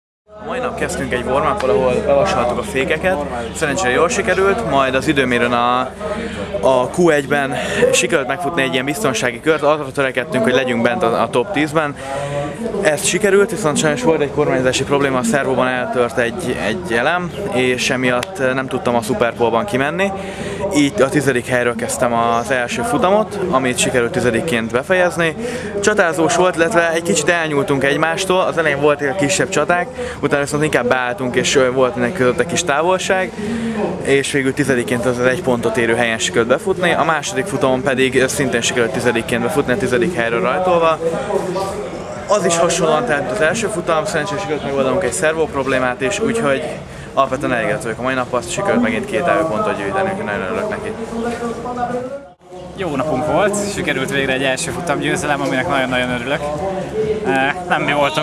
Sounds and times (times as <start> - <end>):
Speech: 0.3 - 58.2.